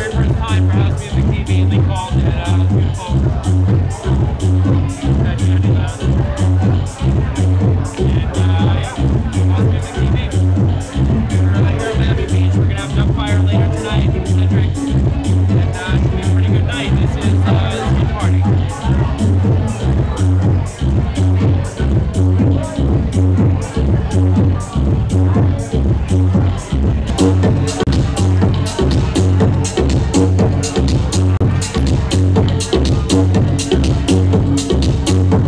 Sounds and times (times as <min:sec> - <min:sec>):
House music: 0:00.0 - 0:35.4
Speech: 0:00.0 - 0:35.4.